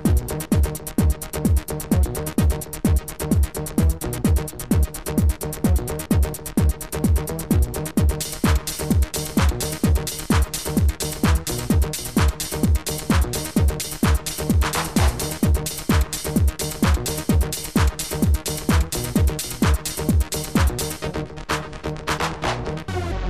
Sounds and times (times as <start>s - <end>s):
Techno: 0.0s - 23.2s.